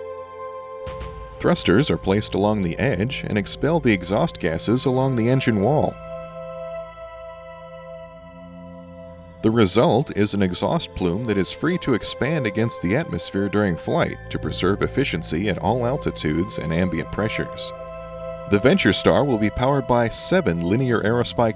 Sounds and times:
Music: 0.0 - 21.5
Speech: 1.4 - 6.0, 9.4 - 17.7, 18.5 - 21.5.

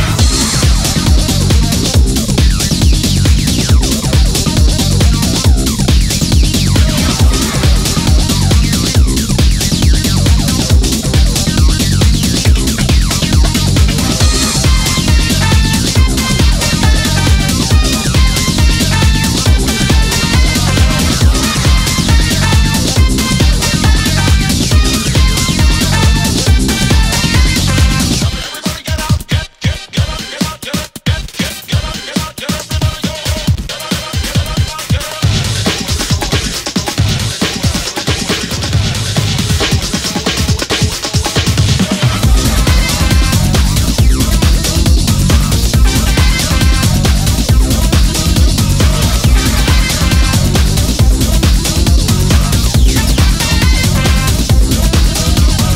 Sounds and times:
Disco: 0.0 - 55.7.

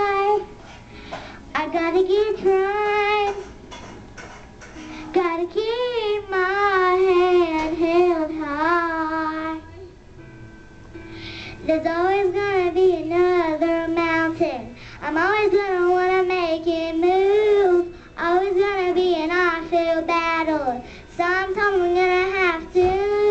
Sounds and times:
Child singing: 0.0 - 0.5, 1.5 - 3.4, 5.1 - 9.9, 11.6 - 23.3
Music: 0.0 - 23.3.

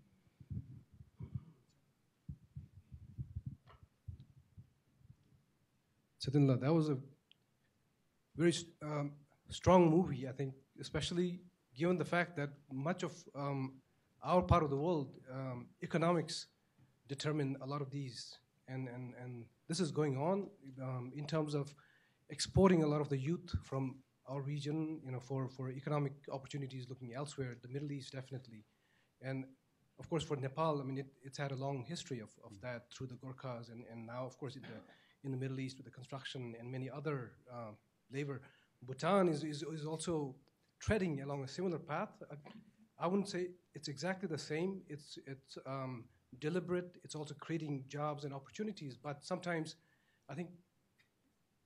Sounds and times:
Speech: 6.2 - 7.1, 8.4 - 50.6.

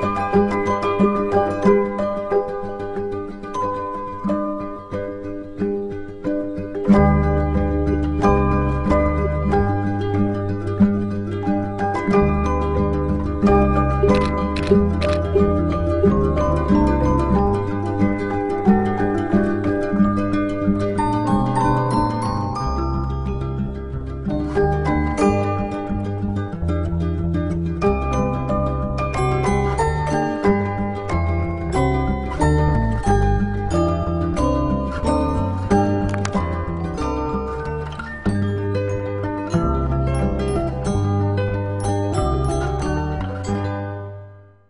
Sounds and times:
Music: 0.0 - 44.6
Single-lens reflex camera: 14.1 - 15.4.

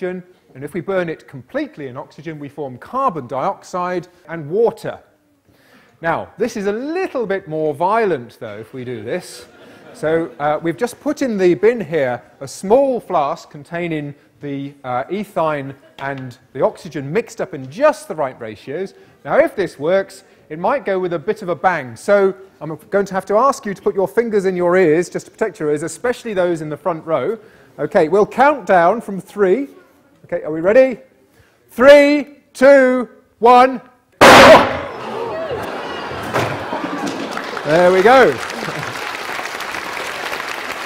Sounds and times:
Speech: 0.0 - 5.1, 6.0 - 31.1, 31.7 - 33.9, 37.6 - 38.4.

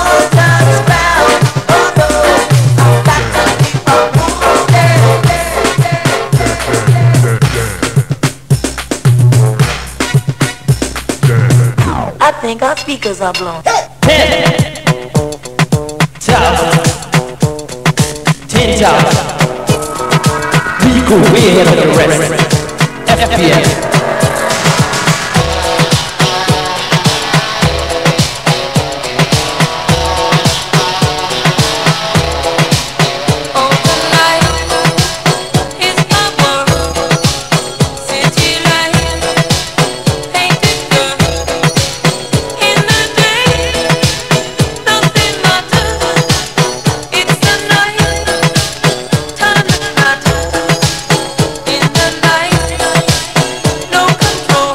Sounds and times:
Music: 0.0 - 54.7
Speech: 12.2 - 14.7, 18.5 - 19.4, 20.8 - 23.8.

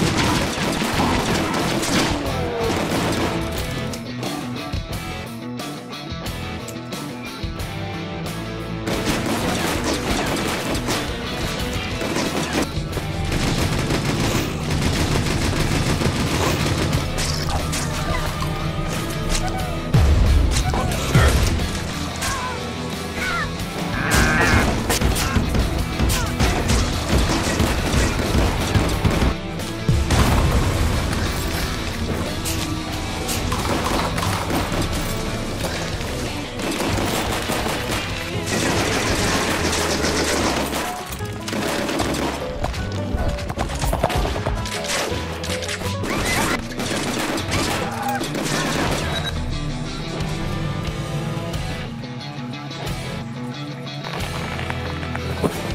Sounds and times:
Machine gun: 0.0 - 3.5, 8.9 - 11.2, 11.9 - 17.4, 24.9 - 29.4, 36.6 - 42.5, 46.0 - 49.3.

